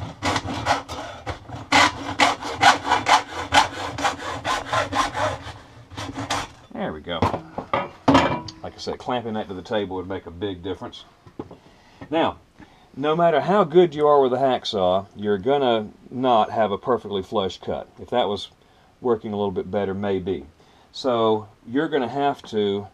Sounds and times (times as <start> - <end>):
Speech: 6.7 - 7.4, 8.5 - 11.1, 12.1 - 12.4, 13.0 - 22.9.